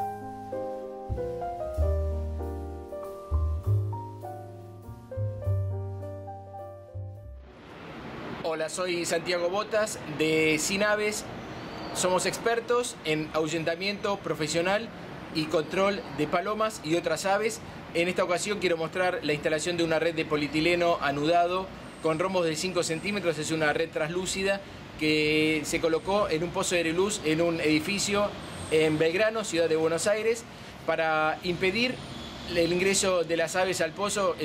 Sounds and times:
Outside, urban or manmade: 0.0s - 34.4s
Speech: 8.4s - 11.3s, 12.0s - 34.4s.

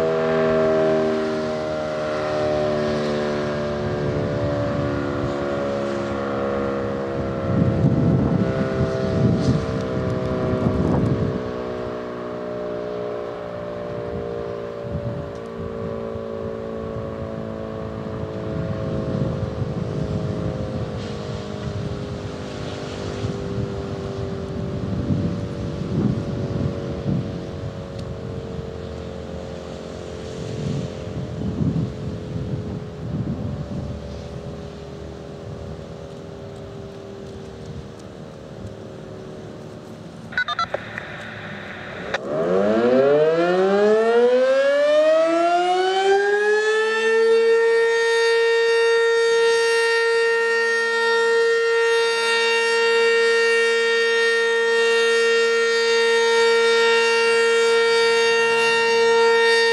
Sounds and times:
Civil defense siren: 0.0s - 40.6s, 42.0s - 59.7s.

